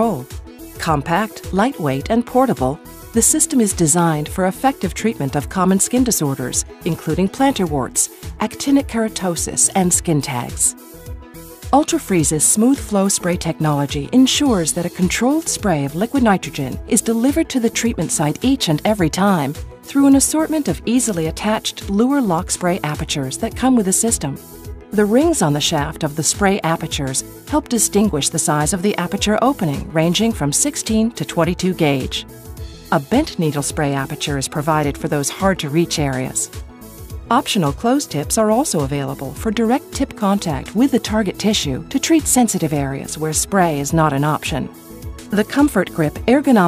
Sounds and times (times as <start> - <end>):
Speech: 0.0 - 10.7, 11.8 - 24.4, 25.0 - 32.2, 32.9 - 36.5, 37.3 - 44.7, 45.3 - 46.6
Music: 0.0 - 46.6.